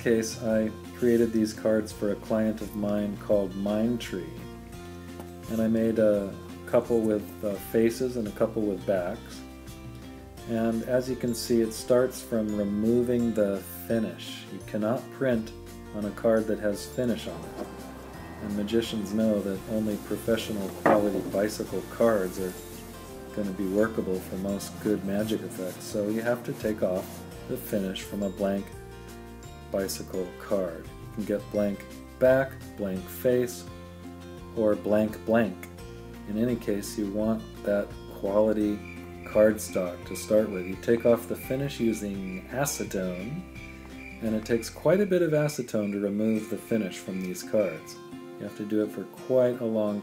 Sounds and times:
Speech: 0:00.0 - 0:04.4, 0:05.5 - 0:09.4, 0:10.5 - 0:17.5, 0:18.4 - 0:22.6, 0:23.3 - 0:28.7, 0:29.7 - 0:33.7, 0:34.6 - 0:35.7, 0:36.3 - 0:43.5, 0:44.2 - 0:50.0
Music: 0:00.0 - 0:50.0.

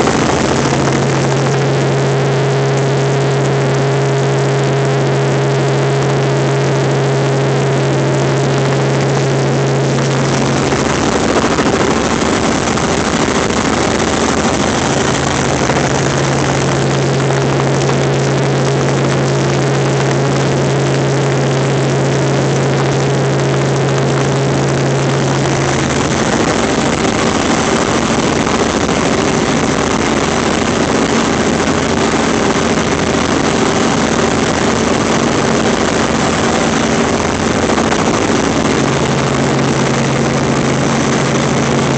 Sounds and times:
Aircraft: 0:00.0 - 0:41.9.

